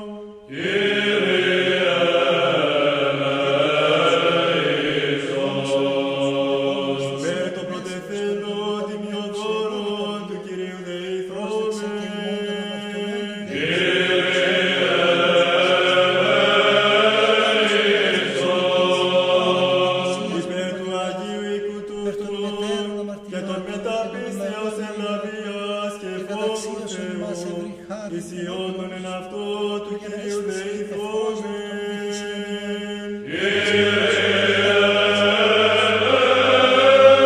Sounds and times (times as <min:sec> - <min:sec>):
Mantra: 0:00.0 - 0:37.2.